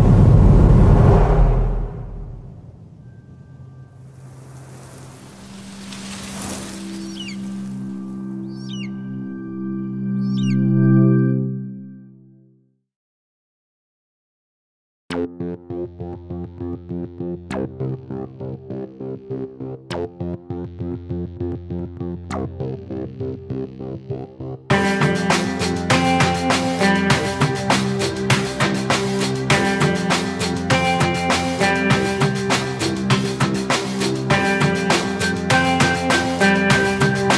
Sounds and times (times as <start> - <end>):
Music: 5.6 - 12.8, 15.1 - 37.3.